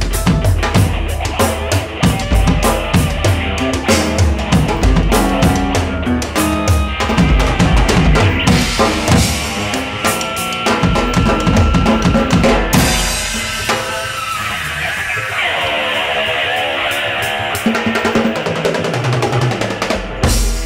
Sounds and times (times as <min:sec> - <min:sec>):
Drum: 0:00.0 - 0:14.8, 0:16.9 - 0:20.6
Drum kit: 0:00.0 - 0:20.6
Progressive rock: 0:00.0 - 0:20.6.